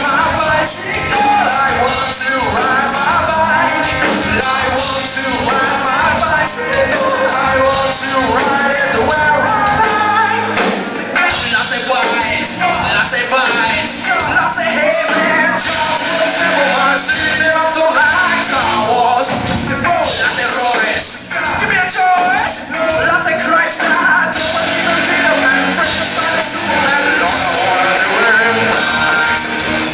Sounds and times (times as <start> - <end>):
Music: 0.0 - 29.9.